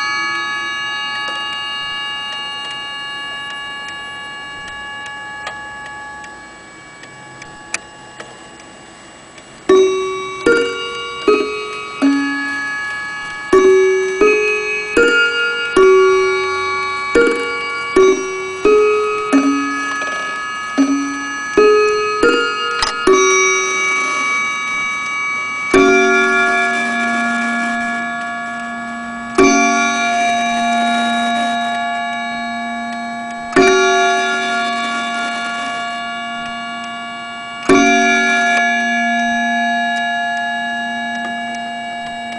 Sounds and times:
Tubular bells: 0.0 - 42.3.

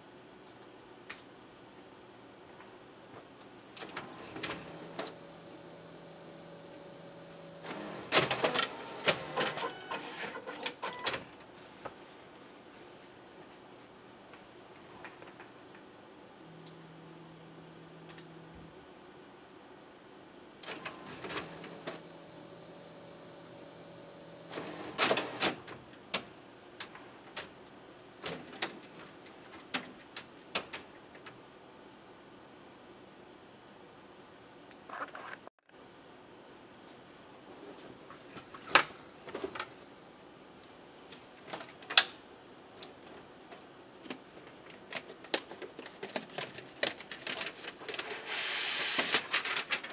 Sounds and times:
Printer: 3.8 - 11.3, 20.6 - 26.3, 47.4 - 49.9.

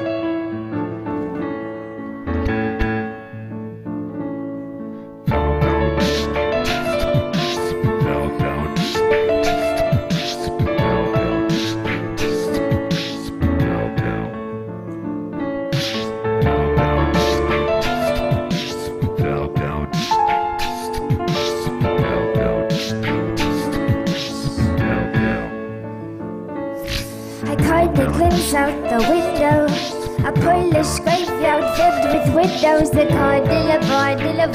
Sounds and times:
Soul music: 0.0 - 34.5.

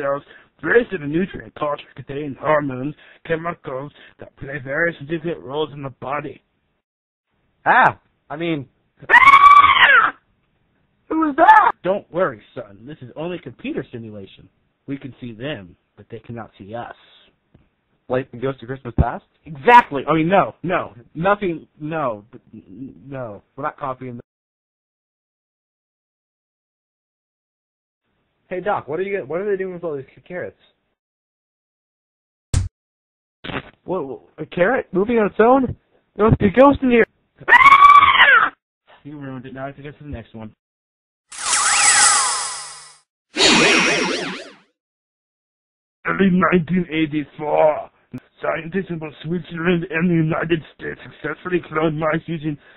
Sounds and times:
Speech: 0.0 - 6.4, 7.6 - 8.7, 11.1 - 17.4, 18.1 - 24.2, 28.5 - 30.8, 33.5 - 37.1, 38.9 - 40.6, 46.1 - 52.6.

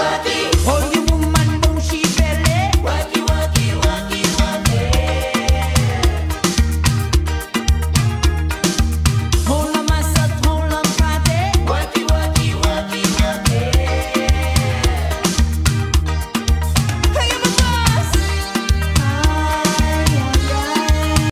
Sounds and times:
Music: 0.0 - 21.3.

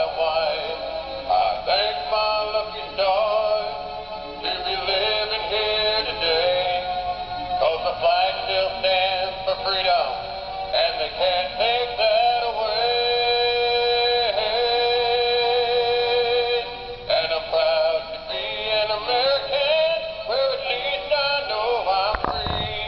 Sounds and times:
Synthetic singing: 0.0 - 3.8, 4.4 - 6.9, 7.6 - 10.2, 10.8 - 22.8
Male singing: 0.0 - 22.8
Music: 0.0 - 22.8.

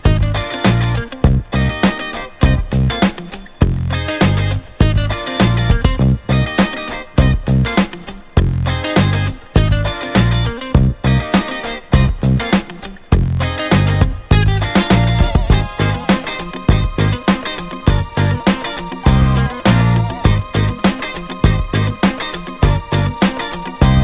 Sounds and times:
Music: 0.0 - 24.0.

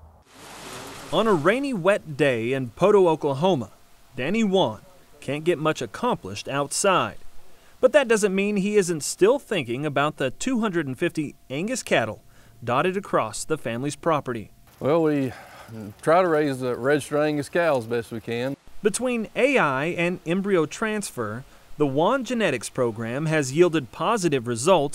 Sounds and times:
Speech: 1.2 - 7.2, 7.8 - 24.9.

